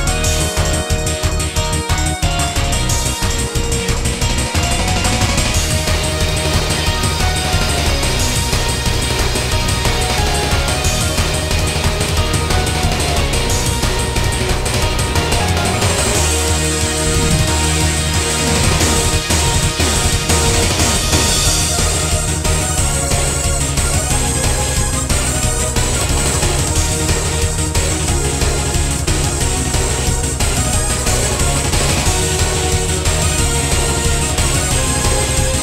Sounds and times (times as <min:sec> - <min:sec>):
Music: 0:00.0 - 0:35.6.